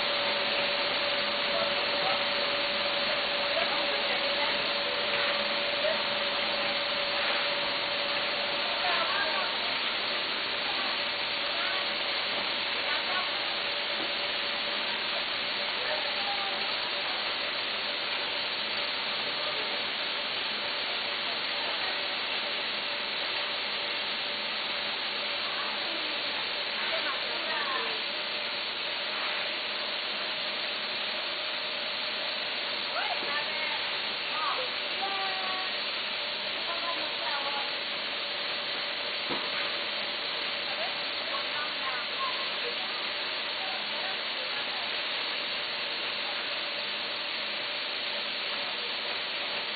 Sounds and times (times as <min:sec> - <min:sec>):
Speech: 0:01.4 - 0:07.5, 0:08.4 - 0:12.1, 0:12.7 - 0:13.8, 0:15.0 - 0:17.4, 0:25.4 - 0:28.1, 0:32.9 - 0:35.8, 0:36.5 - 0:37.8, 0:40.6 - 0:45.1.